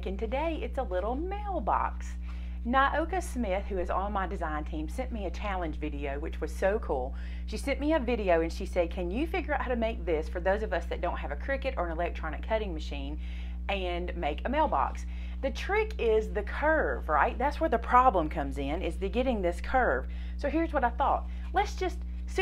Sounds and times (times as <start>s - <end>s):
Inside, small room: 0.0s - 22.4s
Speech: 0.0s - 22.4s.